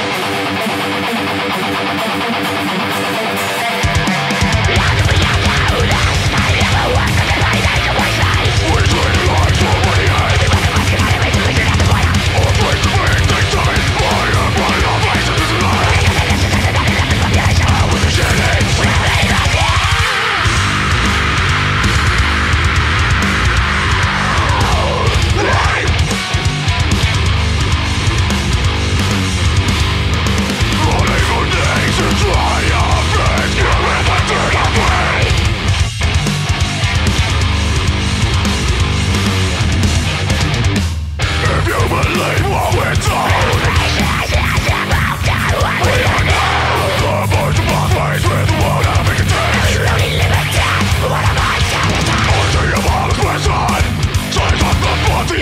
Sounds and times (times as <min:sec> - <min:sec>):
Music: 0:00.0 - 0:55.4.